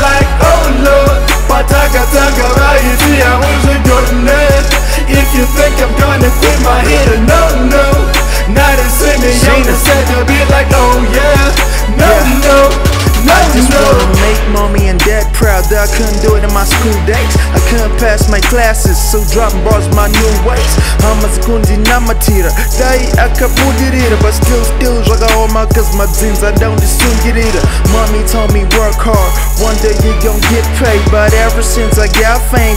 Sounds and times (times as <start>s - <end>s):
Music: 0.0s - 32.7s.